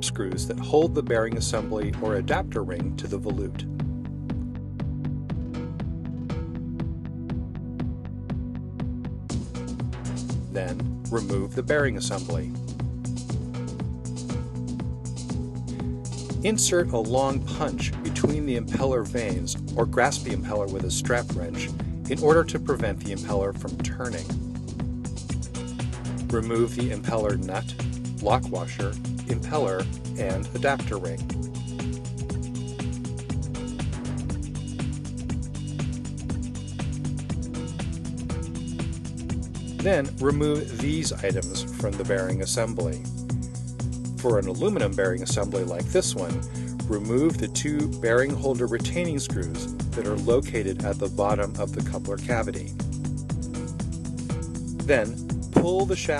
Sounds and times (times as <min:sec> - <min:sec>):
Speech: 0:00.0 - 0:03.7, 0:10.5 - 0:12.6, 0:16.4 - 0:24.4, 0:26.3 - 0:31.3, 0:39.8 - 0:43.0, 0:44.2 - 0:52.7, 0:54.9 - 0:56.2
Music: 0:00.0 - 0:56.2.